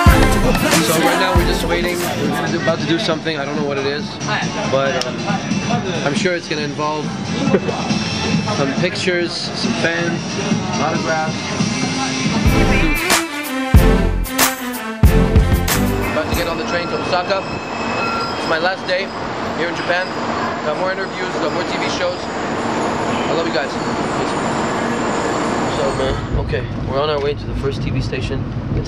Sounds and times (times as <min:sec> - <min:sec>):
Inside, public space: 0:00.0 - 0:12.9, 0:16.1 - 0:28.8
Music: 0:00.0 - 0:18.8
Speech: 0:16.1 - 0:17.5, 0:25.8 - 0:28.8
Train wheels squealing: 0:16.5 - 0:26.5.